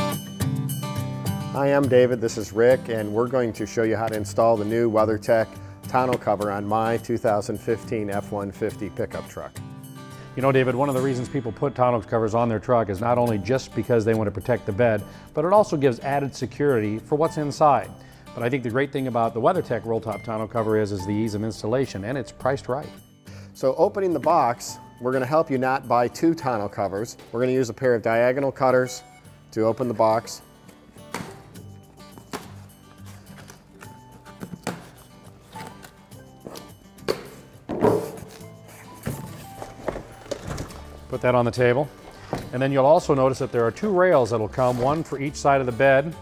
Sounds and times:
Music: 0:00.0 - 0:46.2
Speech: 0:01.6 - 0:09.5, 0:10.4 - 0:22.9, 0:23.6 - 0:30.4, 0:41.1 - 0:41.9, 0:42.5 - 0:46.2.

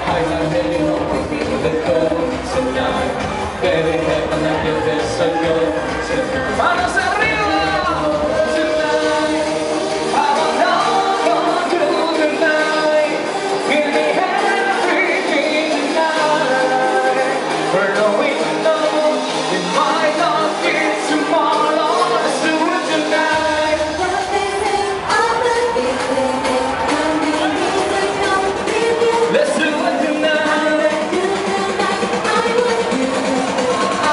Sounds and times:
Electronica: 0:00.0 - 0:34.1.

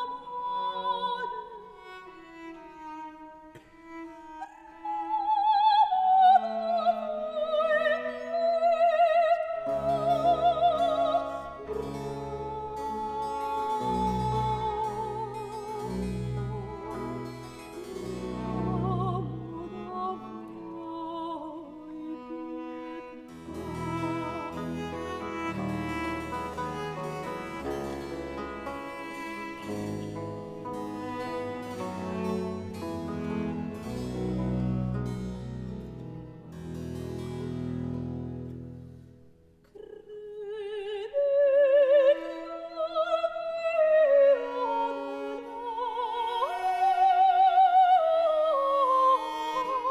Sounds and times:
Opera: 0:00.0 - 0:36.6, 0:39.6 - 0:49.9
Violin, fiddle: 0:00.0 - 0:38.6, 0:41.3 - 0:49.9
Cello: 0:00.0 - 0:49.9.

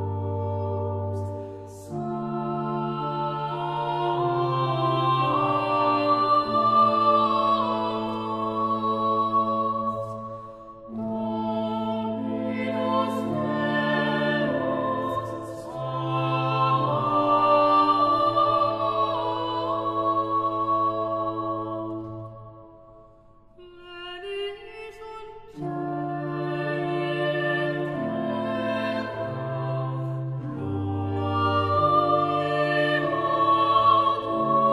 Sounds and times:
Tender music: 0:00.0 - 0:34.7.

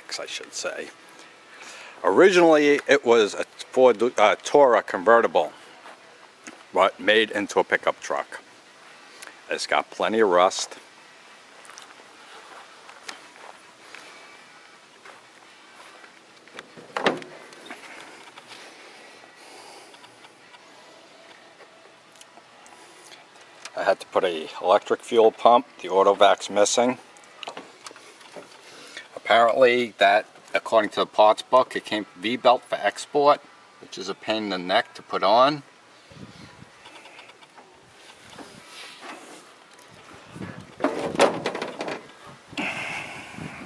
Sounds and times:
Speech: 0:00.0 - 0:00.9, 0:02.0 - 0:05.6, 0:06.7 - 0:08.4, 0:09.5 - 0:10.8, 0:23.8 - 0:27.0, 0:29.2 - 0:35.7.

